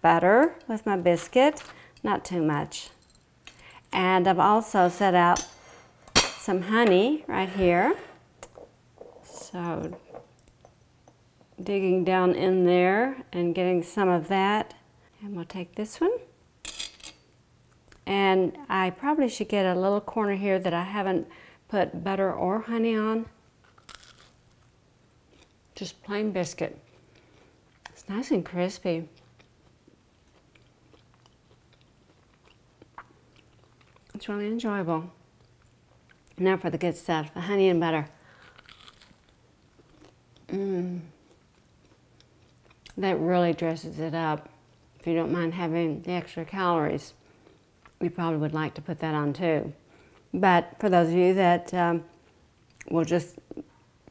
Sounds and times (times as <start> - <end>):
Inside, small room: 0.0 - 54.1.